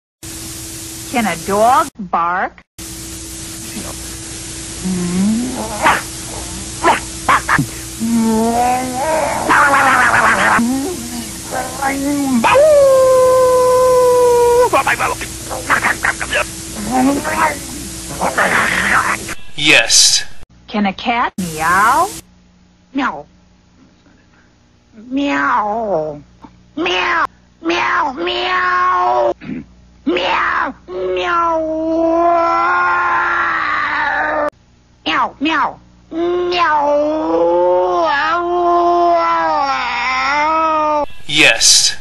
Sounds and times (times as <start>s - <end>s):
Meow: 26.9s - 29.4s, 31.1s - 34.5s, 35.1s - 41.1s.